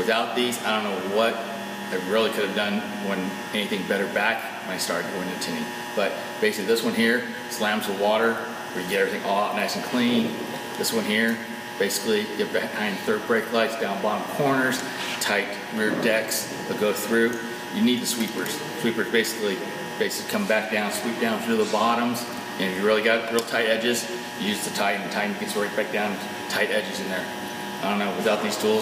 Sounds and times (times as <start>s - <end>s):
Speech: 0.0s - 28.8s.